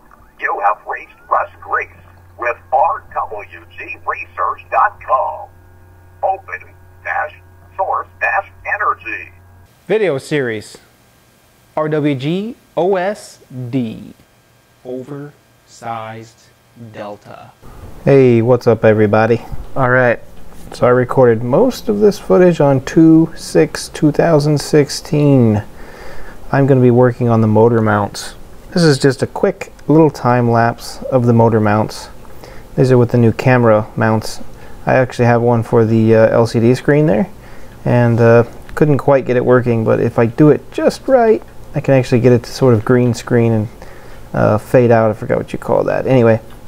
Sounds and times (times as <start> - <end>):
Speech: 0.4 - 5.5, 6.2 - 10.9, 11.8 - 14.2, 14.8 - 25.7, 26.5 - 32.2, 32.8 - 46.5.